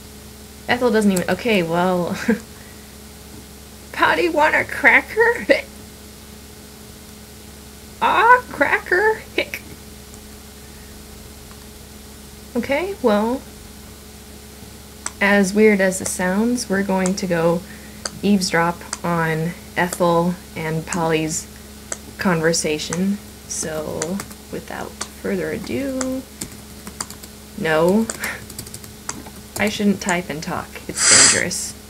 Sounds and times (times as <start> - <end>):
Speech: 0.7 - 2.4, 3.9 - 5.7, 8.0 - 9.7, 12.6 - 13.5, 15.2 - 21.5, 22.2 - 26.3, 27.6 - 28.4, 29.6 - 31.8.